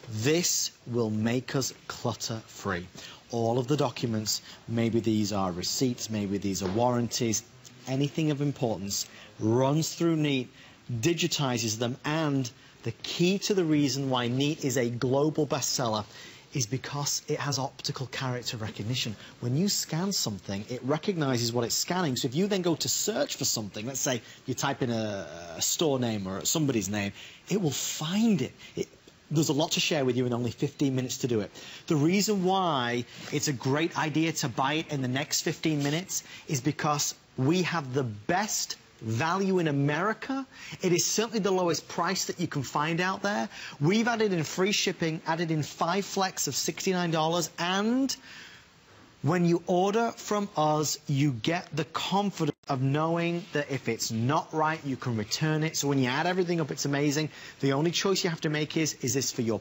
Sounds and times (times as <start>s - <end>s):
Narration, monologue: 0.0s - 59.6s.